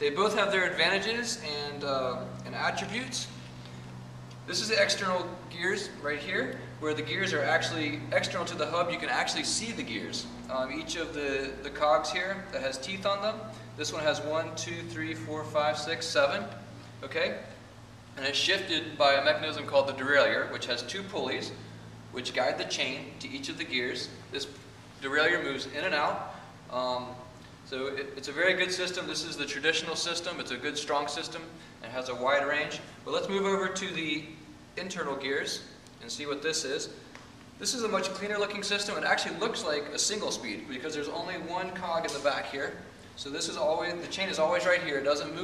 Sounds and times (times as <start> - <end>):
Speech: 0.0 - 3.4, 4.5 - 17.6, 18.2 - 37.0, 37.6 - 45.4.